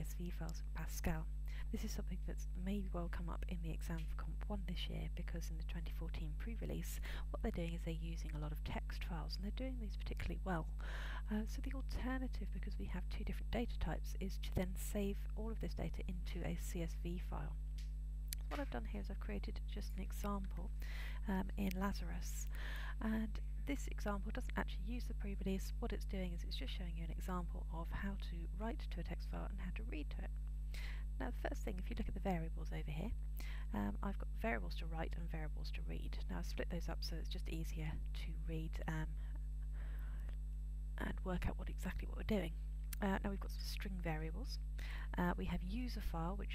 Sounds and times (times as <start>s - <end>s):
Speech: 0.0s - 17.6s, 18.4s - 30.3s, 31.2s - 39.1s, 41.0s - 46.5s.